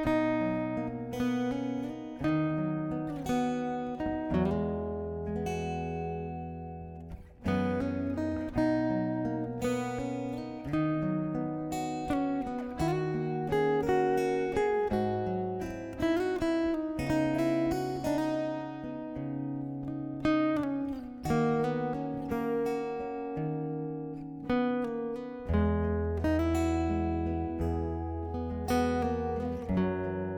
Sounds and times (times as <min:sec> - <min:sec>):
Acoustic guitar: 0:00.0 - 0:30.3.